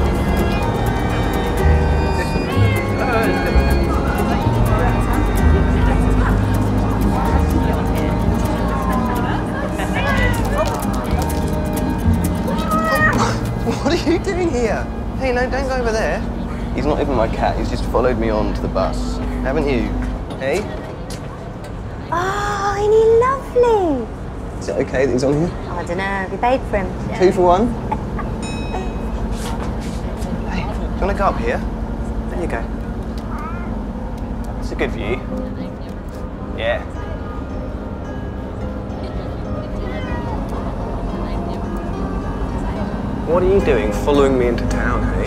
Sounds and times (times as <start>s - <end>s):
Vehicle: 0.0s - 45.2s.